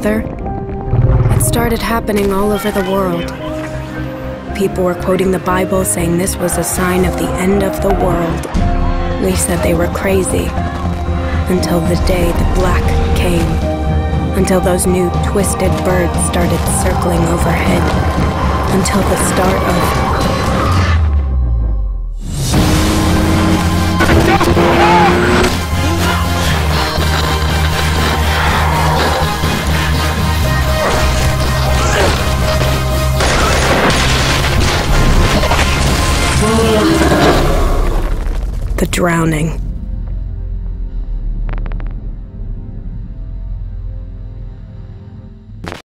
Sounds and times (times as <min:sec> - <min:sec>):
Speech: 0:00.0 - 0:00.2, 0:01.3 - 0:03.6, 0:04.6 - 0:08.5, 0:09.2 - 0:10.5, 0:11.5 - 0:13.6, 0:14.4 - 0:17.9, 0:38.8 - 0:39.6
Rumble: 0:00.0 - 0:02.5, 0:08.1 - 0:45.8
Music: 0:00.0 - 0:45.8.